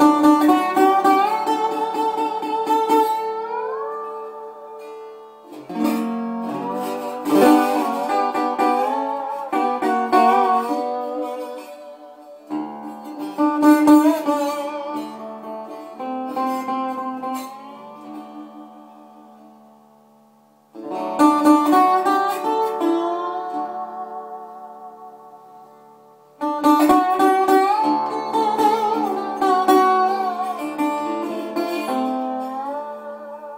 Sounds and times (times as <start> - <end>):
Electric guitar: 0.0 - 20.1.